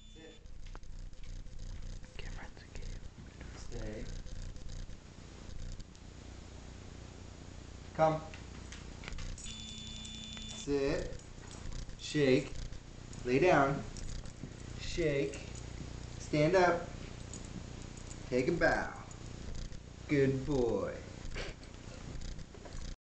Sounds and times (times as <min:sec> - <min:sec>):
Speech: 0:03.6 - 0:04.1, 0:08.0 - 0:08.4, 0:10.6 - 0:11.2, 0:12.0 - 0:12.6, 0:13.2 - 0:13.9, 0:14.8 - 0:15.5, 0:16.2 - 0:16.9, 0:18.3 - 0:19.1, 0:20.1 - 0:21.1.